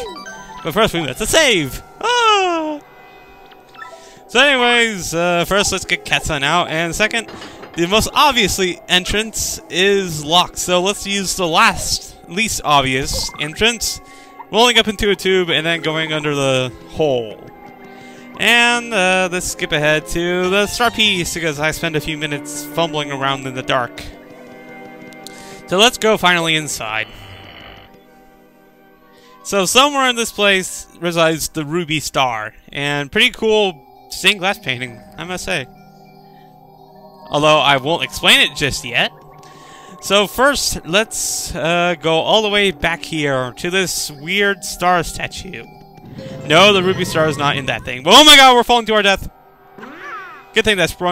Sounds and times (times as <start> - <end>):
Speech: 0.7 - 2.8, 4.3 - 17.4, 18.4 - 24.1, 25.7 - 27.1, 29.5 - 35.7, 37.3 - 39.1, 40.0 - 45.7, 46.5 - 49.3, 50.6 - 51.1.